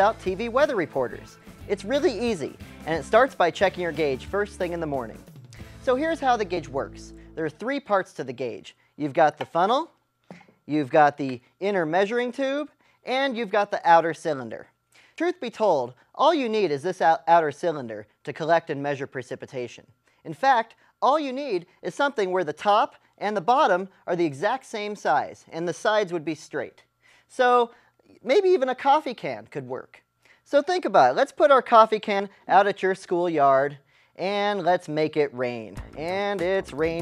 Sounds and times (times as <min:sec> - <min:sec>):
Speech: 0:00.0 - 0:05.2, 0:05.9 - 0:10.0, 0:10.7 - 0:37.0
Music: 0:00.0 - 0:07.4, 0:35.8 - 0:37.0.